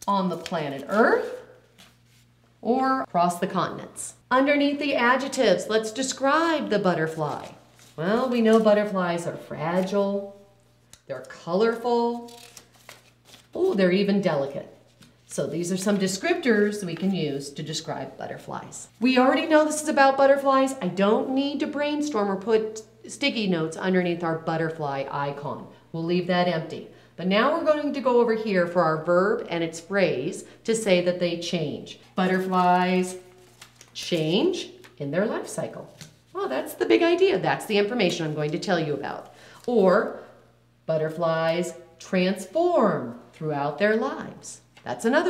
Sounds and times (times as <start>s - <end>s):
Speech: 0.0s - 1.4s, 2.6s - 10.4s, 11.1s - 12.3s, 13.6s - 33.2s, 34.0s - 40.2s, 40.9s - 45.2s.